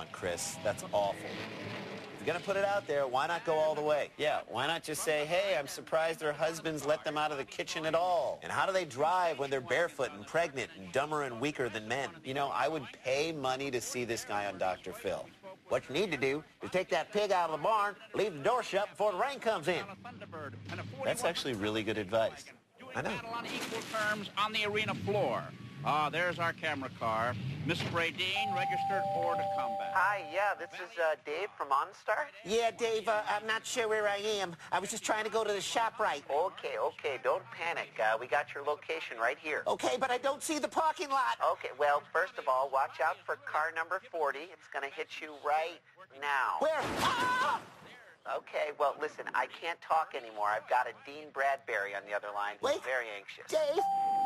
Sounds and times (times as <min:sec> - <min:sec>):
Speech: 0:00.0 - 0:01.2, 0:02.2 - 0:53.8.